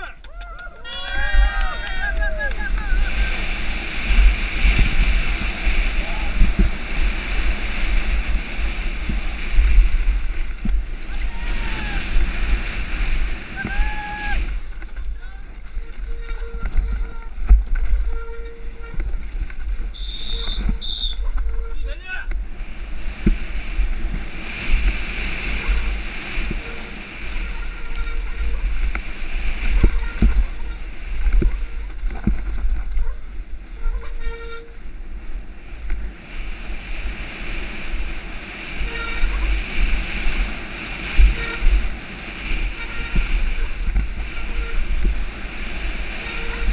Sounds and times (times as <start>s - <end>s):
Speech: 21.8s - 22.3s.